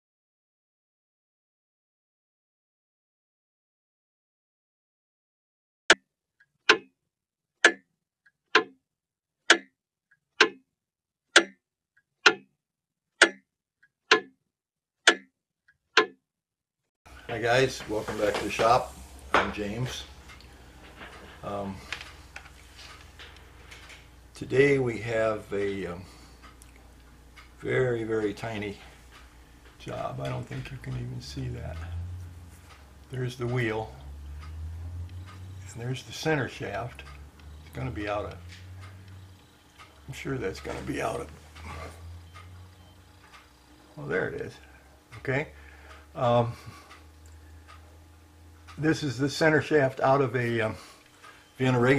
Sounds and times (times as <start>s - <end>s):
Clock: 6.7s - 6.9s, 7.6s - 7.8s, 8.5s - 8.8s, 9.5s - 9.7s, 10.4s - 10.6s, 11.4s - 11.6s, 12.2s - 12.5s, 13.2s - 13.4s, 14.1s - 14.3s, 15.0s - 15.3s, 16.0s - 16.2s, 17.1s - 51.9s
Speech: 17.3s - 20.1s, 21.4s - 21.9s, 24.4s - 26.1s, 27.6s - 28.9s, 29.8s - 31.9s, 33.1s - 34.0s, 35.7s - 37.0s, 37.8s - 38.4s, 40.1s - 41.4s, 44.0s - 44.6s, 45.2s - 45.5s, 46.2s - 46.6s, 48.8s - 50.8s, 51.6s - 51.9s.